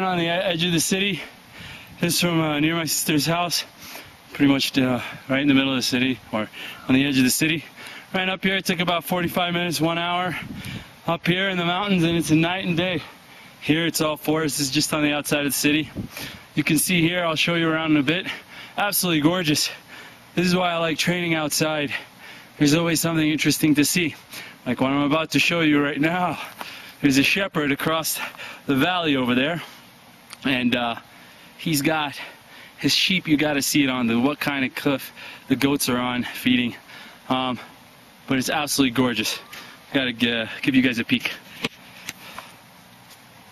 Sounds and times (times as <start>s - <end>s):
Speech: 0.0s - 1.3s, 2.0s - 3.7s, 4.4s - 10.4s, 11.1s - 16.0s, 16.6s - 19.8s, 20.4s - 22.0s, 22.6s - 29.7s, 30.4s - 37.7s, 38.3s - 41.4s.